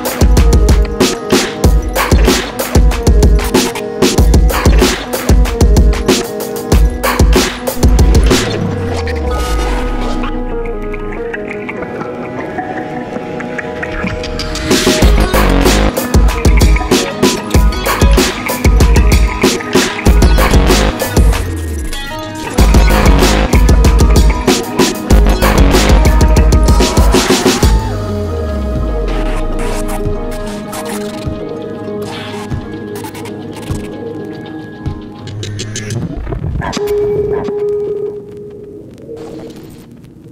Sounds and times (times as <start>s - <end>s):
Electronica: 0.0s - 40.0s.